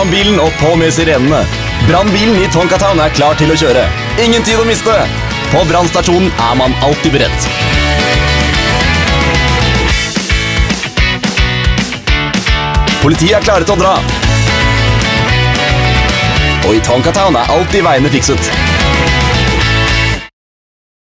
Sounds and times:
Speech: 0.0 - 7.5, 13.0 - 14.1, 16.6 - 18.5
Music: 0.0 - 20.3.

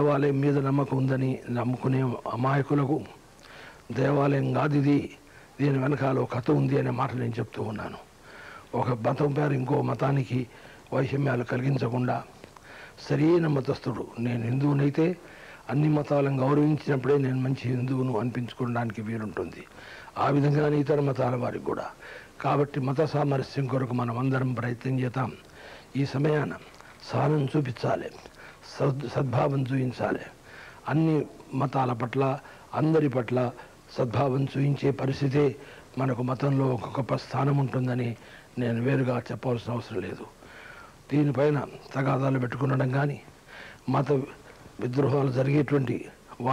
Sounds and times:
Male speech, man speaking: 0.0 - 3.2, 3.9 - 8.1, 8.7 - 12.3, 13.0 - 40.3, 41.1 - 43.3, 43.9 - 46.5
Narration, monologue: 0.0 - 46.5.

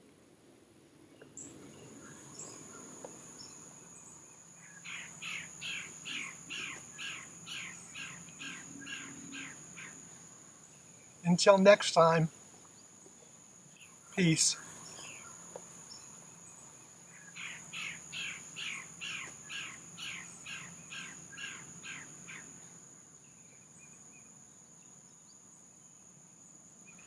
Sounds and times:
Insect: 0.0 - 27.0
Speech: 11.3 - 12.3, 14.2 - 14.6.

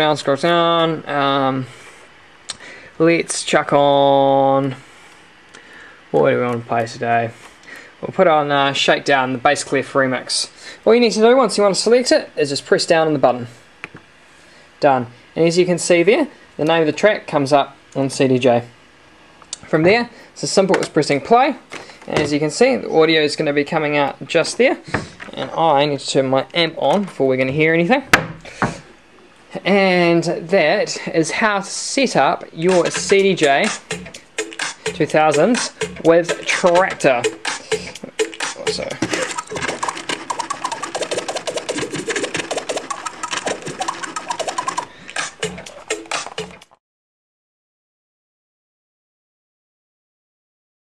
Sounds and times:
Scratching (performance technique): 32.6 - 46.8.

